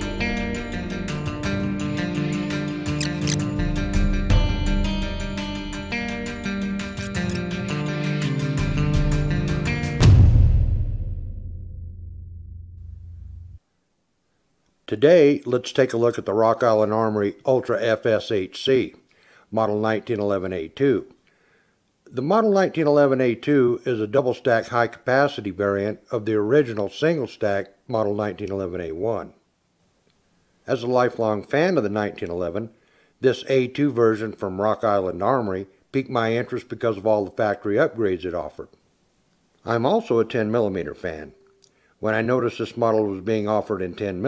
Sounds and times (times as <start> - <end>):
Music: 0.0 - 13.6
Speech: 14.9 - 21.2, 22.1 - 29.4, 30.7 - 38.7, 39.6 - 41.4, 42.0 - 44.2.